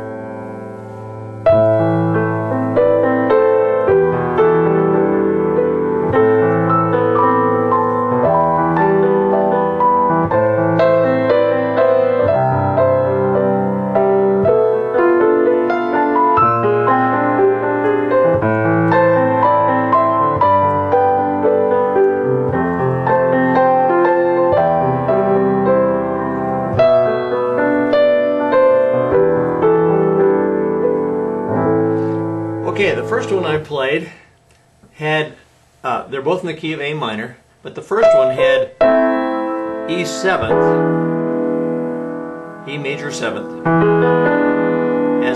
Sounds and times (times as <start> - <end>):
Music: 0.0 - 34.0, 38.0 - 45.3.